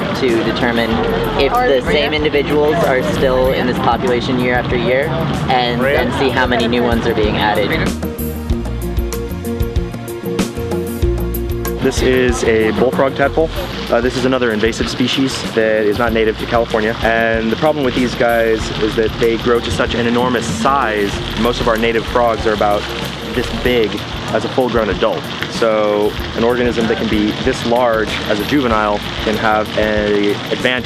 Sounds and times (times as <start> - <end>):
Stream: 0.0 - 30.8.